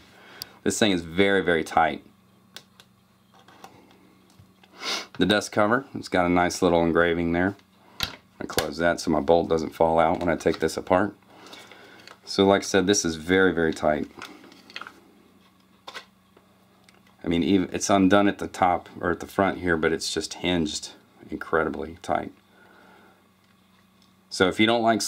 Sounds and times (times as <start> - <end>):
Speech: 0.6 - 2.1, 5.2 - 7.6, 8.4 - 11.2, 12.3 - 14.2, 17.2 - 22.4, 24.3 - 25.0.